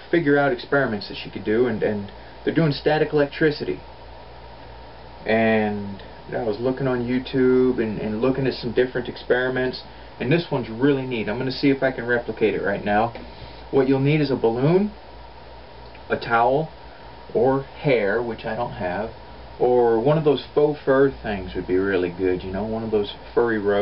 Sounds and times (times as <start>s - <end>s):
Speech: 0.0s - 3.9s, 5.2s - 15.0s, 16.0s - 23.8s.